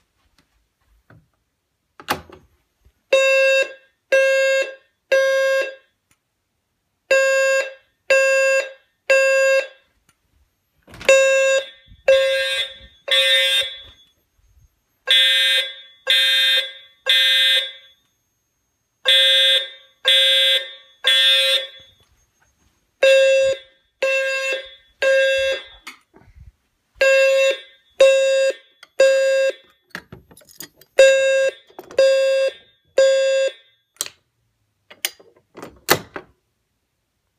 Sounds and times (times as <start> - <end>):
Buzzer: 3.2 - 5.9, 7.1 - 9.8, 11.1 - 14.1, 15.0 - 18.0, 19.0 - 22.1, 23.0 - 25.8, 27.0 - 29.8, 31.0 - 33.6.